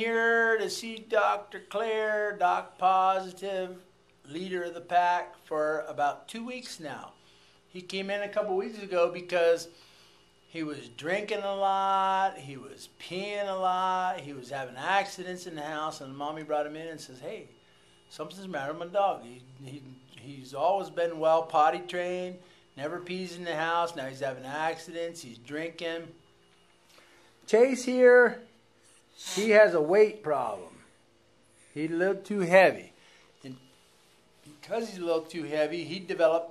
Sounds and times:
Speech: 0.0 - 9.7, 10.5 - 26.2, 27.5 - 28.5, 29.2 - 30.9, 31.8 - 33.7, 34.5 - 36.5.

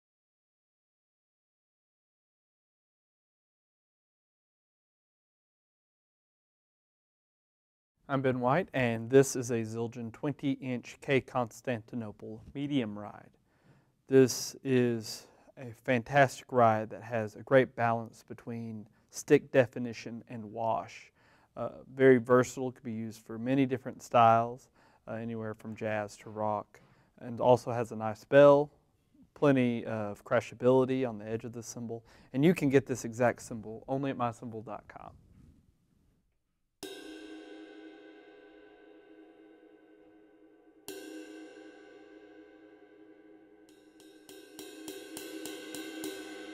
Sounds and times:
Speech: 8.1 - 13.3, 14.1 - 28.8, 29.4 - 35.2.

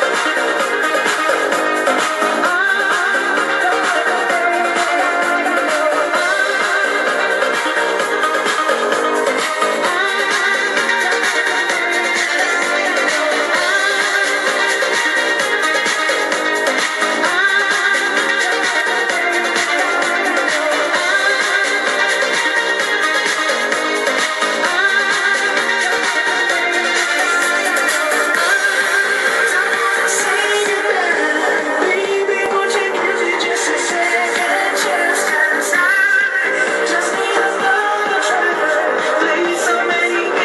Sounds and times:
Music: 0.0 - 40.4.

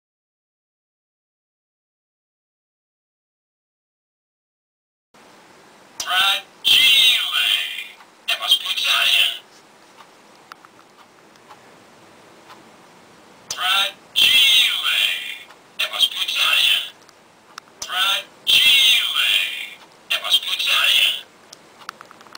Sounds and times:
Speech: 6.0 - 9.5, 13.5 - 17.0, 17.8 - 21.3.

